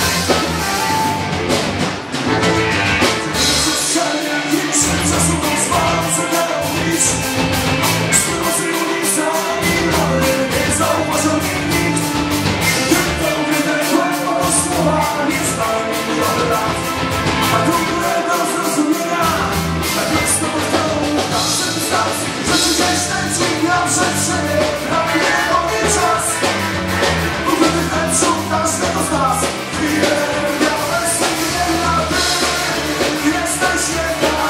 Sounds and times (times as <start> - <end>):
Musical instrument: 0.0 - 34.4
Punk rock: 0.0 - 34.4.